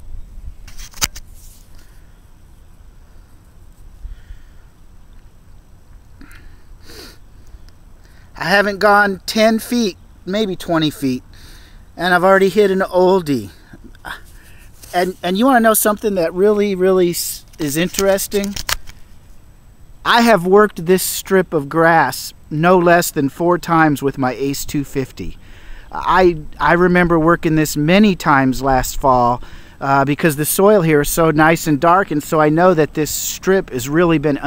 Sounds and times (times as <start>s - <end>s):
Speech: 8.4s - 11.2s, 12.0s - 14.2s, 14.9s - 18.6s, 20.1s - 34.4s.